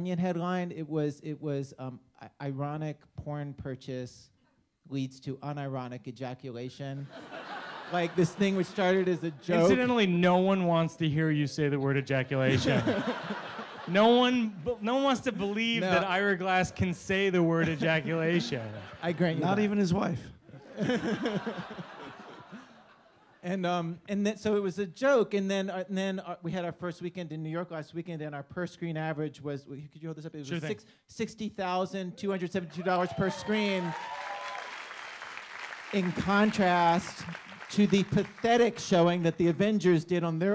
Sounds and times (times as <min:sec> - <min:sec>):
Speech: 0:00.0 - 0:04.3, 0:04.9 - 0:07.1, 0:07.9 - 0:12.9, 0:13.9 - 0:20.4, 0:23.4 - 0:34.0, 0:36.0 - 0:40.5.